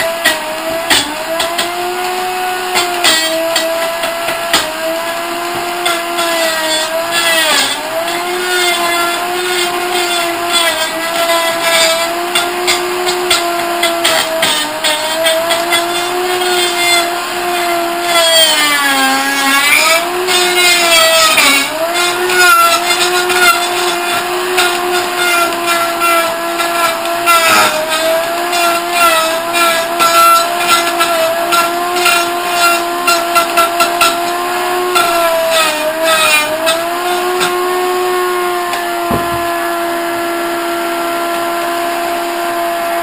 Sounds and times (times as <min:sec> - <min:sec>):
Blender: 0:00.0 - 0:43.0.